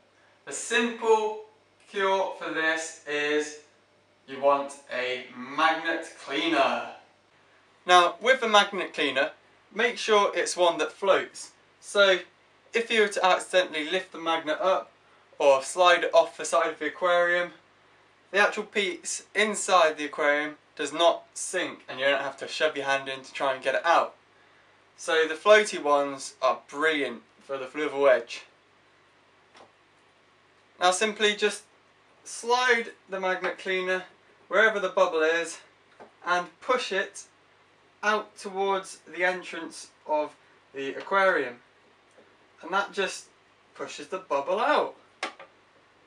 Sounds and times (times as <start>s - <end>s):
Speech: 0.5s - 3.7s, 4.3s - 7.1s, 7.8s - 17.6s, 18.3s - 24.2s, 25.0s - 28.6s, 30.8s - 31.7s, 32.3s - 37.3s, 38.0s - 41.6s, 42.6s - 45.0s.